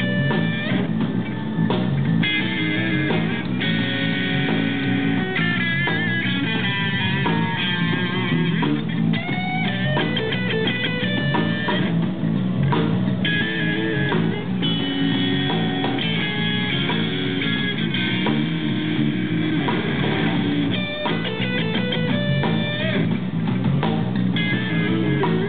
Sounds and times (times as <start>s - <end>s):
Bass guitar: 0.0s - 25.4s.